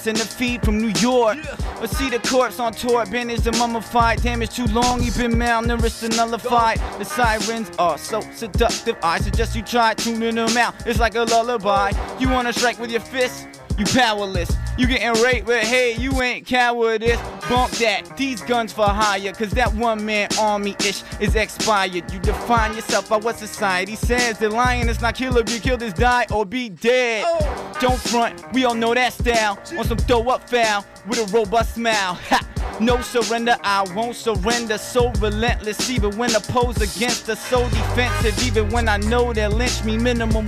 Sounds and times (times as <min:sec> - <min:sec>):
Music: 0:00.0 - 0:40.4.